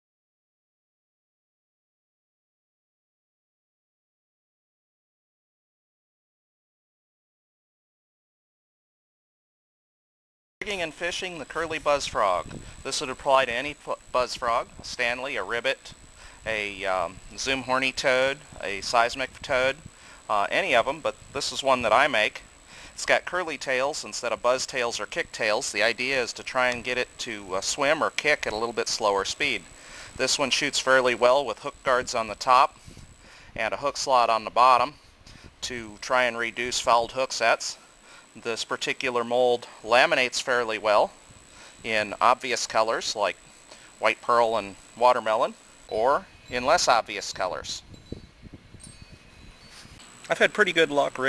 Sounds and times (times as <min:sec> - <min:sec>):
Speech: 0:10.6 - 0:22.4, 0:23.0 - 0:32.8, 0:33.6 - 0:35.0, 0:35.6 - 0:37.8, 0:38.4 - 0:41.2, 0:41.8 - 0:43.4, 0:44.0 - 0:47.9, 0:50.3 - 0:51.2.